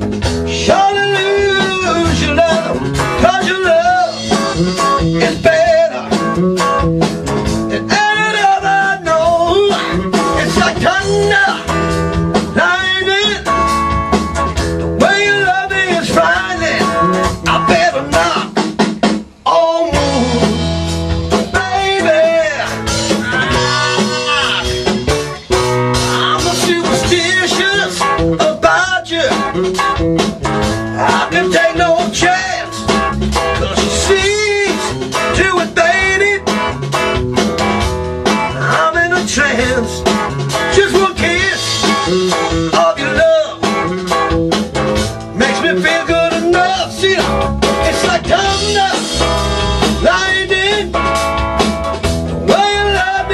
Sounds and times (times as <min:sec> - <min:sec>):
Drum: 0:00.0 - 0:53.3.